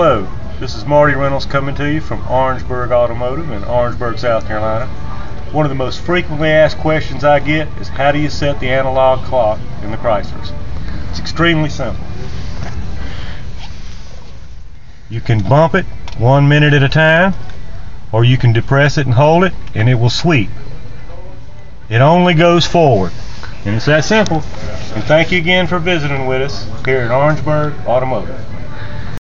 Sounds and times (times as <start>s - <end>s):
Speech: 15.1s - 17.4s, 18.2s - 20.5s, 21.9s - 28.6s.